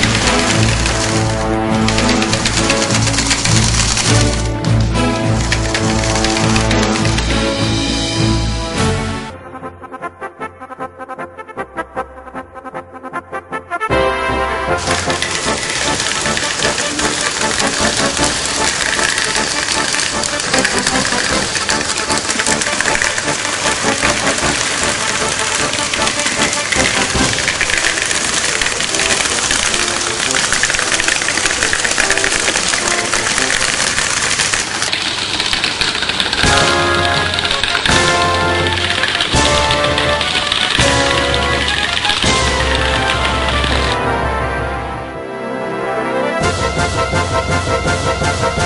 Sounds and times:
Music: 0:00.0 - 0:48.6.

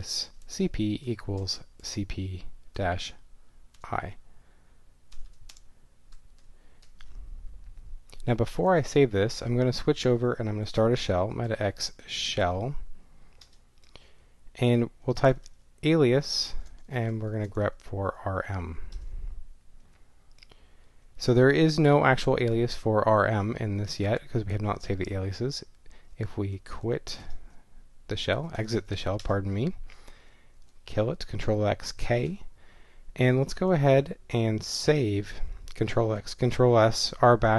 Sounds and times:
Speech: 0:00.0 - 0:03.2, 0:03.8 - 0:04.2, 0:08.2 - 0:12.9, 0:14.6 - 0:18.9, 0:21.2 - 0:27.4, 0:28.1 - 0:29.8, 0:30.9 - 0:32.5, 0:33.2 - 0:37.5.

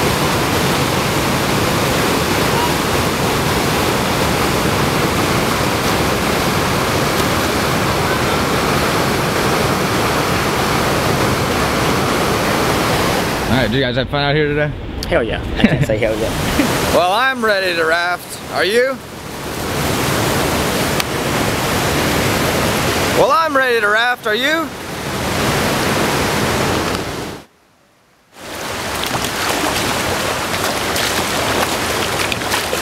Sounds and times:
Speech: 0:13.5 - 0:19.0, 0:23.2 - 0:24.7.

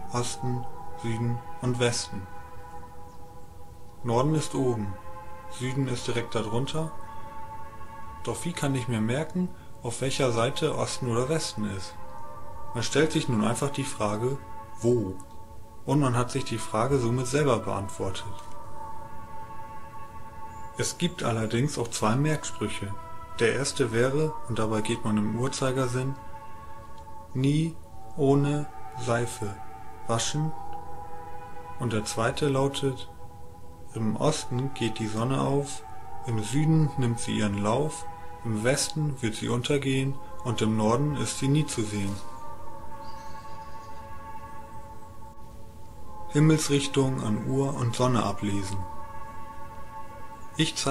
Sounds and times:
Music: 0:00.0 - 0:50.9
Speech: 0:00.1 - 0:02.3, 0:04.0 - 0:05.0, 0:05.6 - 0:06.9, 0:08.3 - 0:12.0, 0:12.8 - 0:15.2, 0:15.9 - 0:18.4, 0:20.8 - 0:26.2, 0:27.4 - 0:30.6, 0:31.8 - 0:33.1, 0:34.0 - 0:42.2, 0:46.3 - 0:48.8, 0:50.6 - 0:50.9.

